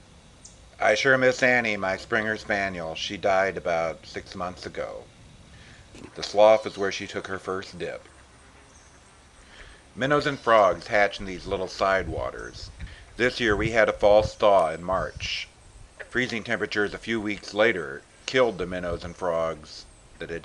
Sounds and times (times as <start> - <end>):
Speech: 0.8 - 5.1, 6.0 - 8.1, 10.0 - 15.5, 16.1 - 20.4.